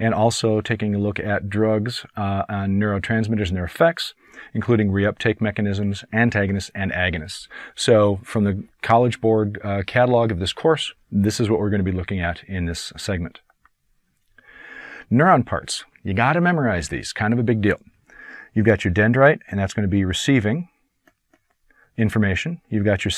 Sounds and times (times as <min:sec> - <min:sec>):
Narration, monologue: 0:00.0 - 0:23.1.